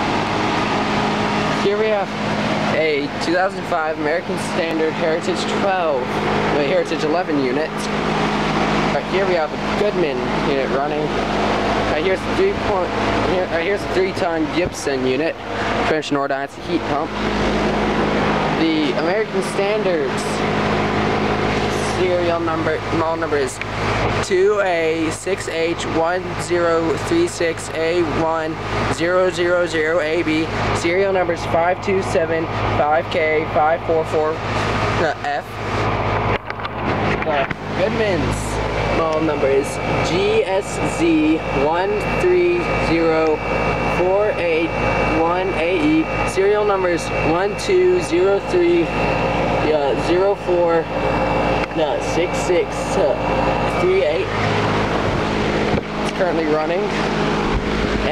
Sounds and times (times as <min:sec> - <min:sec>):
Speech: 0:01.6 - 0:02.1, 0:02.7 - 0:08.0, 0:08.9 - 0:11.2, 0:11.9 - 0:17.2, 0:18.6 - 0:20.4, 0:21.7 - 0:34.4, 0:35.0 - 0:35.6, 0:37.2 - 0:49.0, 0:49.6 - 0:50.9, 0:51.7 - 0:54.4, 0:56.1 - 0:57.0.